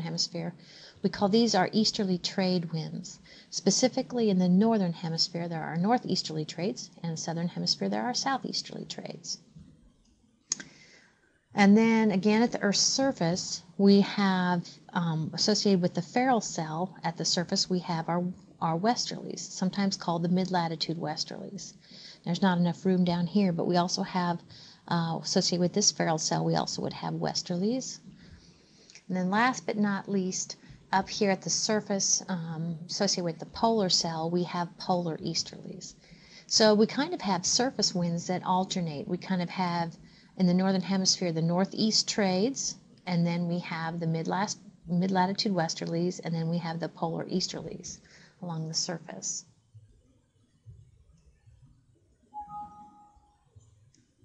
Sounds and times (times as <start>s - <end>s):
Speech: 0.0s - 9.4s, 11.6s - 28.1s, 29.1s - 49.4s.